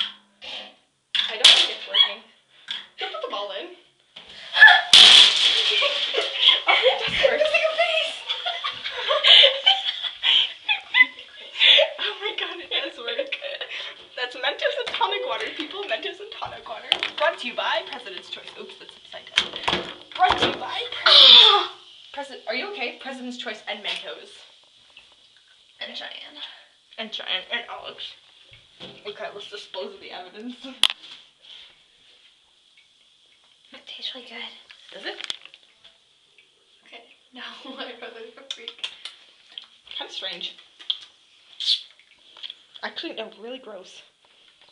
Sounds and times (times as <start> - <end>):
Speech: 1.2 - 2.3, 6.7 - 8.3, 14.2 - 19.4, 20.2 - 24.4, 29.0 - 30.8, 40.0 - 40.6, 42.8 - 44.1.